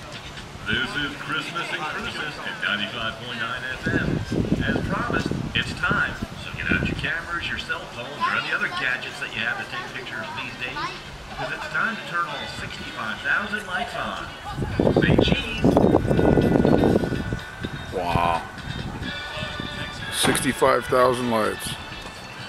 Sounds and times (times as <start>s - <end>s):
Music: 0.0s - 22.4s
Outside, urban or manmade: 0.0s - 22.4s
Speech: 18.0s - 18.5s, 20.1s - 21.8s.